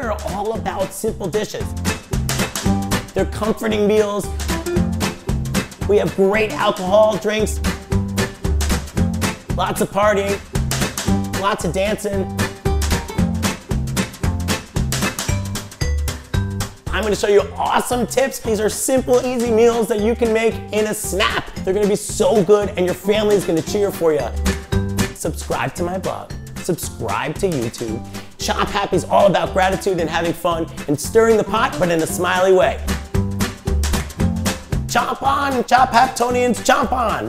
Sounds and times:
Speech: 0.0 - 1.7, 3.2 - 4.3, 5.8 - 7.6, 9.6 - 10.4, 11.4 - 12.3, 16.9 - 24.4, 25.2 - 32.9, 34.9 - 37.2
Music: 0.0 - 37.2.

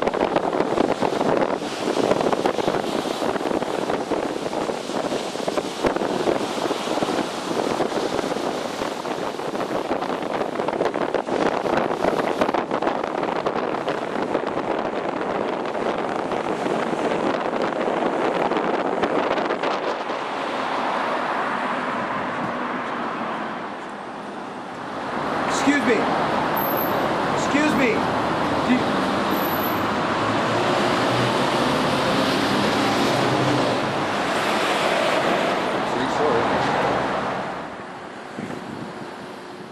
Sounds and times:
Speech: 25.5 - 26.1, 27.4 - 28.0, 28.6 - 28.9, 35.9 - 36.6.

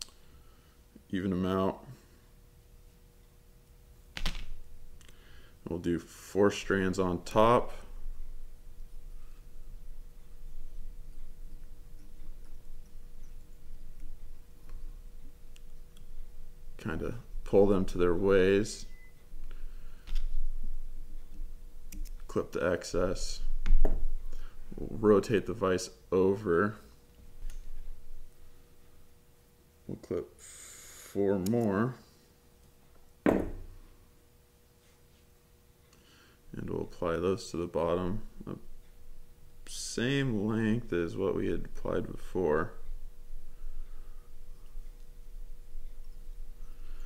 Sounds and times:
Speech: 1.1 - 2.0, 5.6 - 7.9, 16.8 - 18.9, 22.3 - 23.5, 24.8 - 26.9, 29.9 - 30.4, 31.2 - 32.1, 36.5 - 38.7, 39.7 - 42.8.

